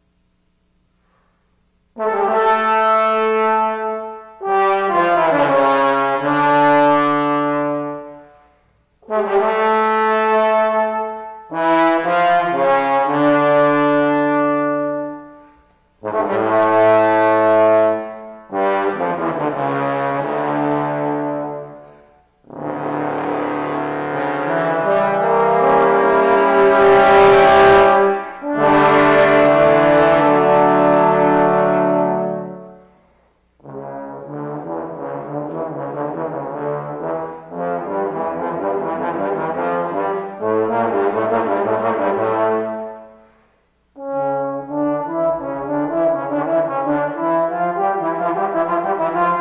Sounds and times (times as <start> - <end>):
Trombone: 1.9 - 49.4.